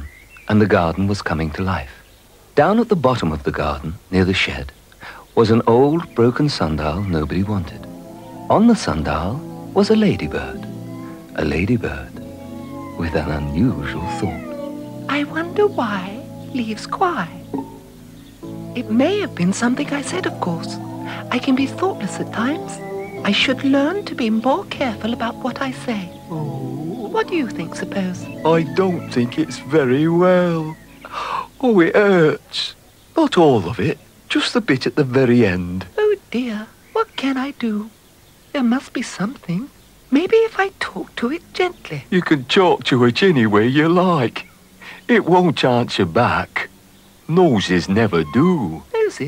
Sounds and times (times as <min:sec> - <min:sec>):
Speech: 0:00.0 - 0:02.0, 0:02.6 - 0:04.8, 0:05.4 - 0:07.9, 0:08.5 - 0:10.7, 0:11.4 - 0:12.2, 0:13.0 - 0:14.5, 0:15.1 - 0:17.4, 0:18.8 - 0:30.8, 0:31.6 - 0:37.9, 0:38.6 - 0:44.5, 0:45.1 - 0:46.7, 0:47.3 - 0:49.2.